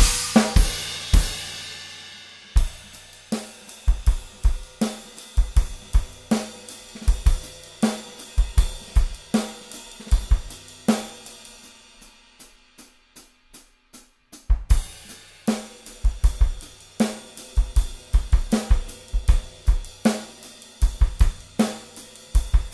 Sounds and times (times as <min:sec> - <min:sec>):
Bass drum: 0:00.0 - 0:01.8, 0:02.6 - 0:03.3, 0:03.9 - 0:11.2, 0:14.4 - 0:22.7
Drum kit: 0:00.0 - 0:22.7.